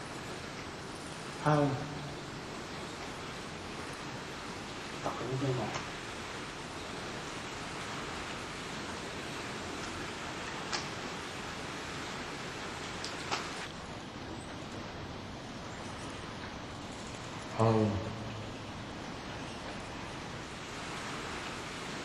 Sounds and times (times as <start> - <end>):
Outside, rural or natural: 0.0 - 22.0
Speech: 1.4 - 2.2, 5.0 - 5.8, 17.5 - 18.4.